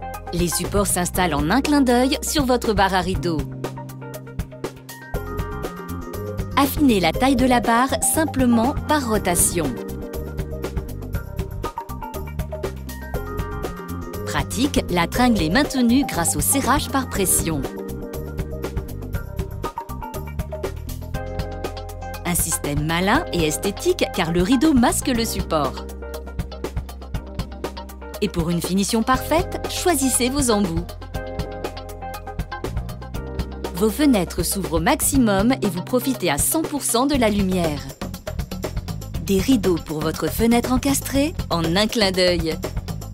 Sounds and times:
Music: 0.0 - 43.1
Speech: 0.4 - 3.5, 6.6 - 9.8, 14.3 - 17.8, 22.3 - 25.8, 28.2 - 30.9, 33.8 - 38.0, 39.2 - 42.6.

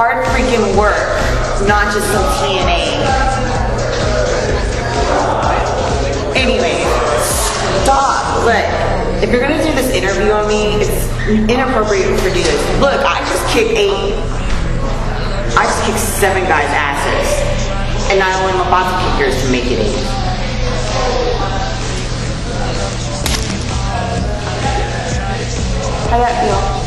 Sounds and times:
Speech: 0.0 - 21.6, 26.0 - 26.8
Music: 0.0 - 26.8.

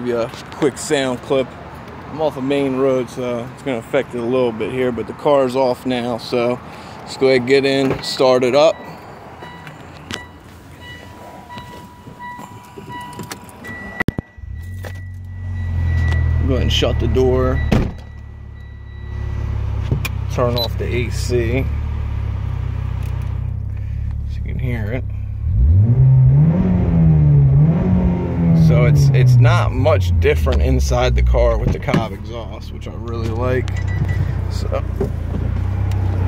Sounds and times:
Speech: 0.0 - 1.5, 2.1 - 8.8, 16.4 - 17.7, 20.3 - 21.7, 24.3 - 25.1, 28.6 - 33.7, 34.5 - 34.9.

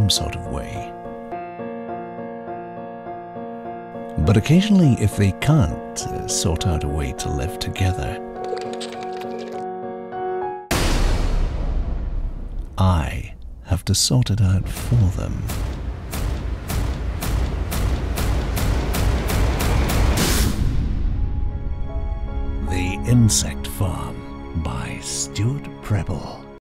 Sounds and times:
Speech: 0.0 - 0.9, 4.2 - 8.2, 12.8 - 15.6, 22.6 - 26.5
Music: 0.0 - 26.6.

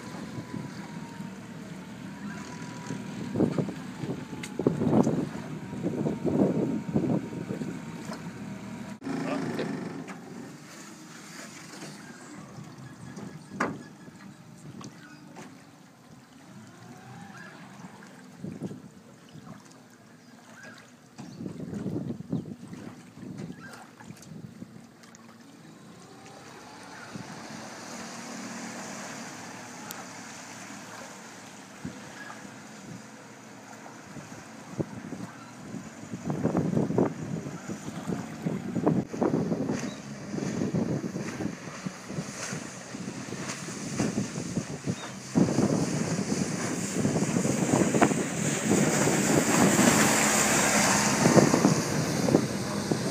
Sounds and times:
Wind noise (microphone): 0.0 - 1.1, 2.3 - 8.3, 18.4 - 19.0, 21.2 - 24.8, 34.1 - 53.1
Motorboat, speedboat: 0.0 - 53.1.

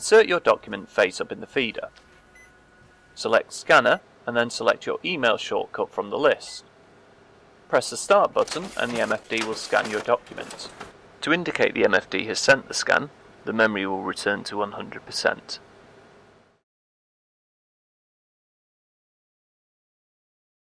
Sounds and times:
Speech: 0.0 - 2.0, 3.2 - 6.7, 7.7 - 15.6.

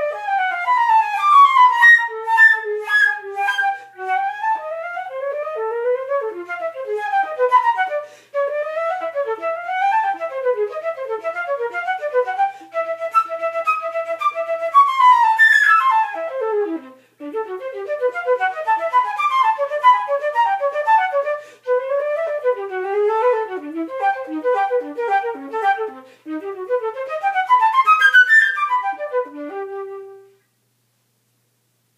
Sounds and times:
Flute: 0.0 - 30.4
Inside, small room: 0.0 - 31.9.

